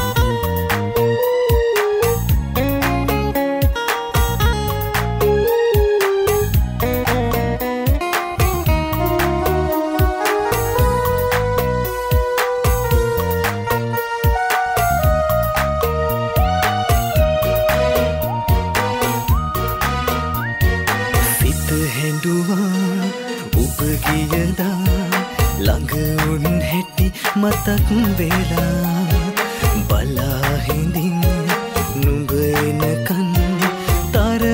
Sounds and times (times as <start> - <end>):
Music: 0.0 - 34.5.